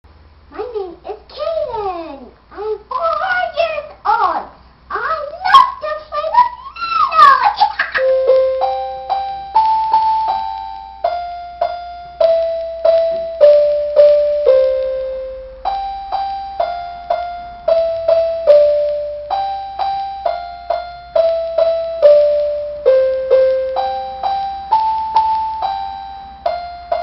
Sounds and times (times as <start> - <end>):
Inside, small room: 0.1 - 27.0
Speech: 0.5 - 8.0
Piano: 1.4 - 27.0.